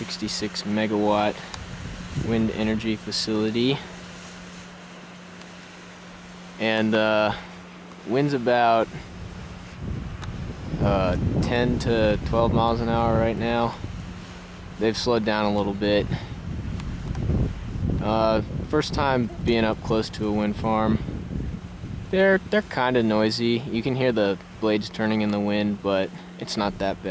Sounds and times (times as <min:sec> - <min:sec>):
Wind noise (microphone): 0:01.6 - 0:02.8, 0:08.9 - 0:14.2, 0:15.6 - 0:22.6.